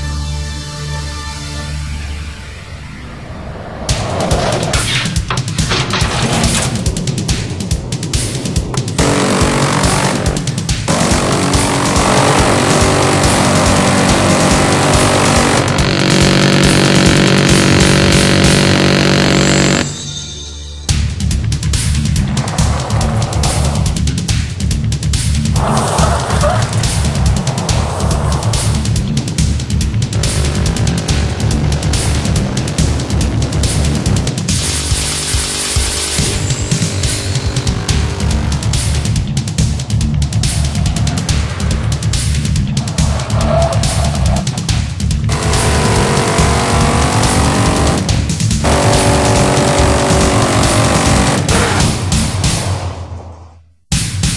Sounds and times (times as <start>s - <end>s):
Music: 0.0s - 54.3s
Skidding: 2.6s - 20.0s, 21.8s - 52.3s.